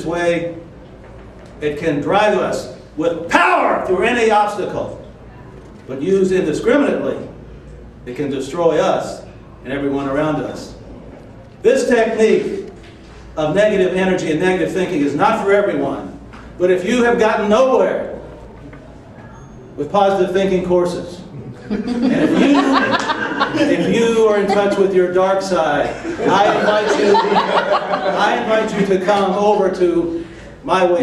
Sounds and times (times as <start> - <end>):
Male speech, man speaking: 0.0 - 0.6, 1.6 - 5.0, 5.9 - 7.3, 8.1 - 10.8, 11.6 - 12.7, 13.4 - 18.2, 19.8 - 21.3, 22.1 - 27.2, 28.0 - 31.0.